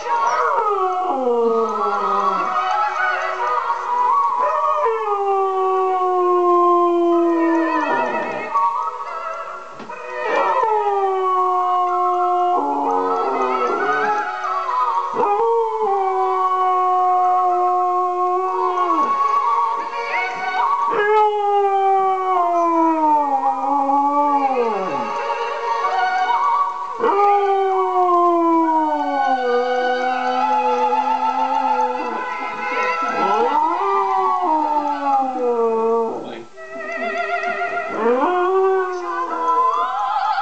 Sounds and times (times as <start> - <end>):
Howl: 0.0 - 9.1, 9.9 - 40.4
Music: 0.0 - 40.4.